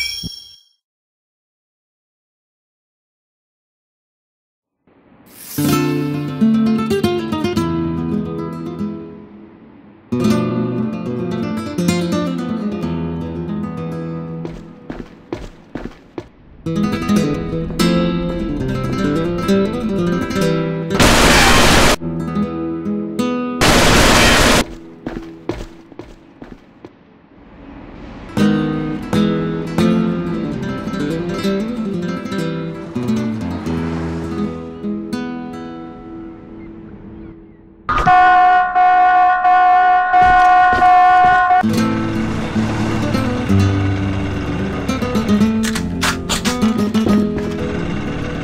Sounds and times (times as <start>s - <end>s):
Music: 5.6s - 15.2s, 16.7s - 25.0s, 28.4s - 37.2s, 41.6s - 48.4s.